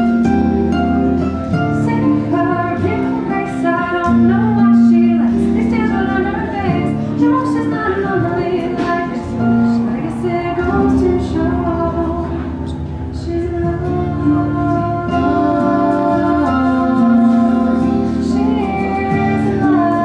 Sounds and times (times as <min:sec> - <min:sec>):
Guitar: 0:00.0 - 0:20.0.